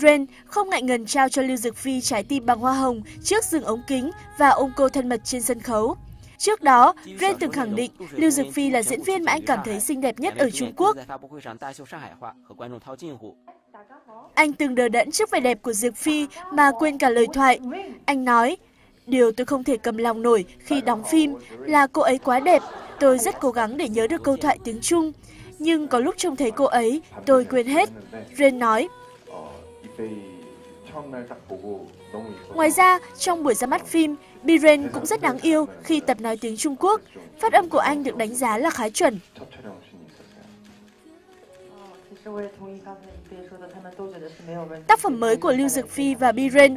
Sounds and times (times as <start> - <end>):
Speech: 0.0 - 13.3, 13.9 - 30.2, 30.9 - 40.5, 43.6 - 46.7.